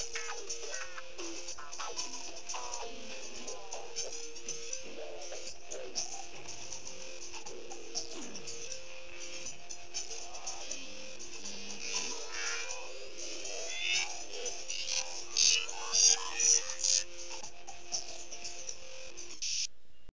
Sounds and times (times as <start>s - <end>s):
Music: 0.0s - 20.1s.